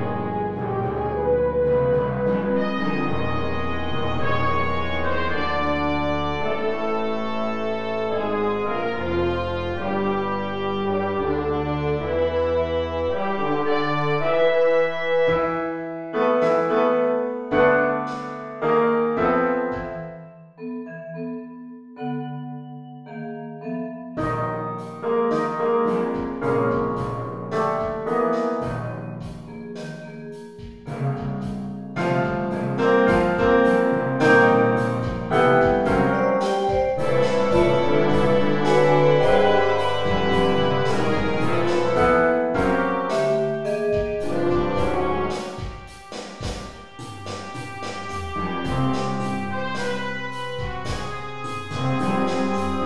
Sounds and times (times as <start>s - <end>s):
Inside, small room: 0.0s - 52.8s
Piano: 0.0s - 52.8s
Vibraphone: 19.7s - 45.7s.